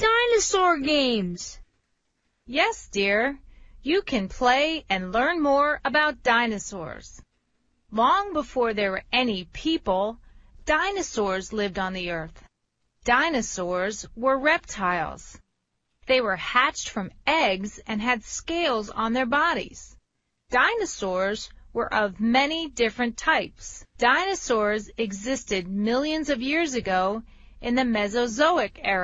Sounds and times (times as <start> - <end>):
Speech: 0.0 - 1.6, 2.5 - 7.2, 7.9 - 12.4, 13.1 - 15.4, 16.1 - 29.0.